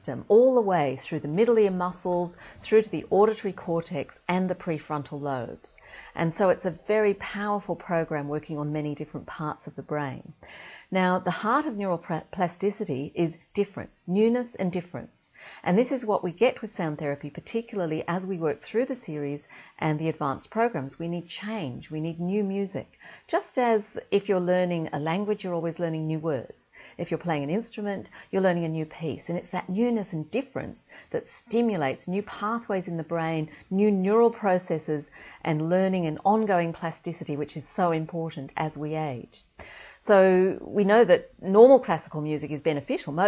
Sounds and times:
Speech: 0.0s - 10.3s, 10.9s - 39.4s, 40.0s - 43.2s.

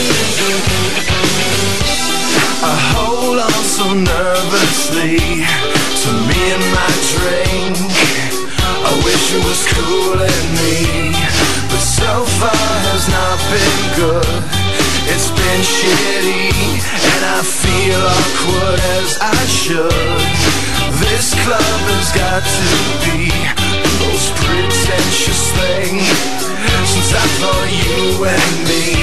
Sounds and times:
Music: 0.0s - 29.0s.

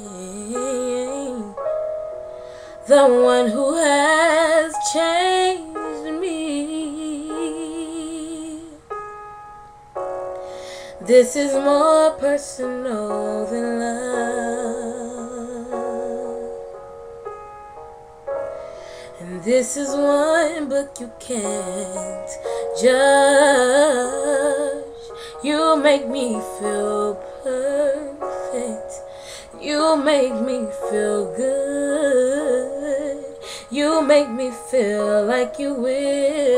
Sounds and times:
Female singing: 0.0s - 1.6s, 2.9s - 8.8s, 11.0s - 16.5s, 19.2s - 29.0s, 29.6s - 36.5s
Music: 0.0s - 36.5s.

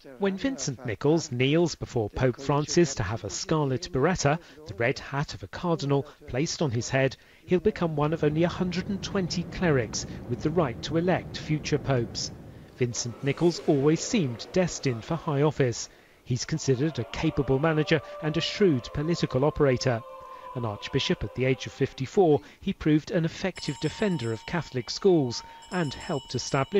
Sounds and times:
Speech: 0.0s - 26.7s.

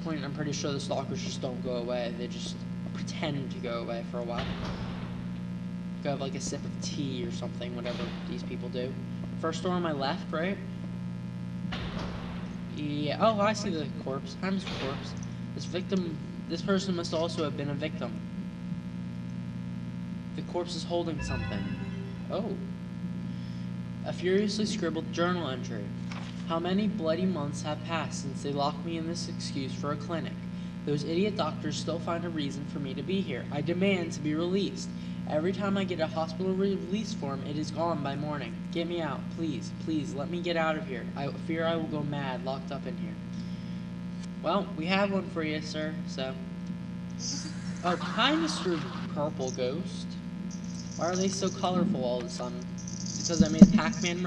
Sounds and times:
Speech: 0.0s - 4.6s, 6.0s - 10.7s, 12.7s - 18.2s, 20.4s - 22.7s, 24.0s - 43.3s, 44.4s - 46.5s, 47.2s - 50.2s, 51.0s - 54.2s.

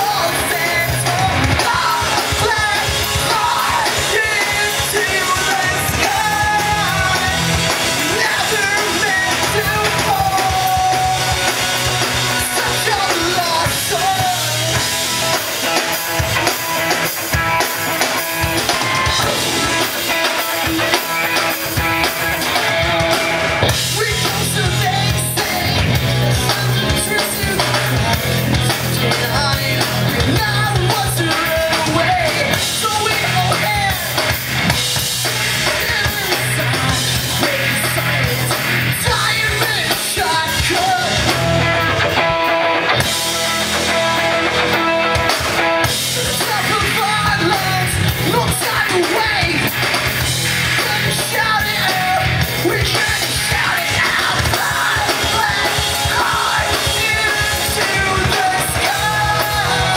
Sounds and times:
Music: 0.0s - 59.9s.

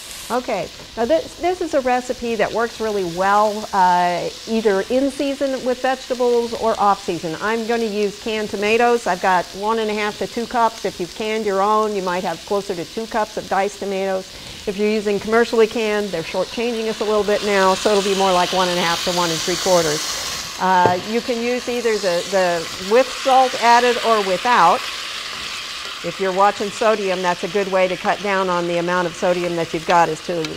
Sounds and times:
Speech: 0.3s - 20.0s, 26.1s - 30.5s.

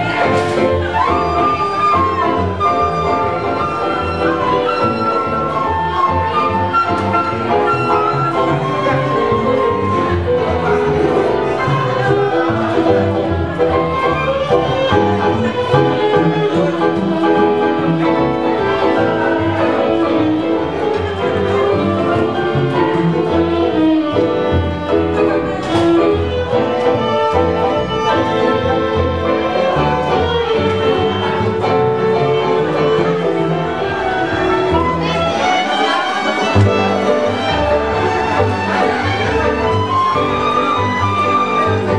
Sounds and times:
Orchestra: 0.0s - 41.9s
Piano: 0.0s - 41.9s
Violin, fiddle: 0.0s - 41.9s
Wedding music: 0.0s - 41.9s.

